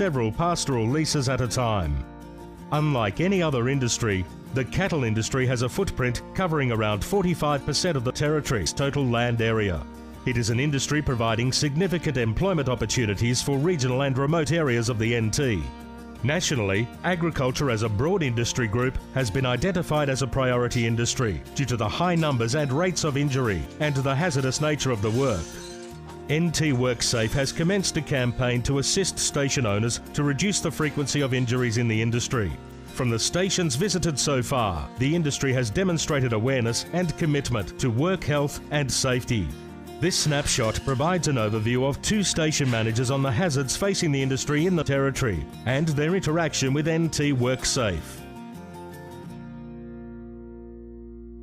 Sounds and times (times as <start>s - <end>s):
Speech: 0.0s - 2.0s, 2.7s - 25.5s, 26.3s - 48.2s
Music: 0.0s - 51.4s.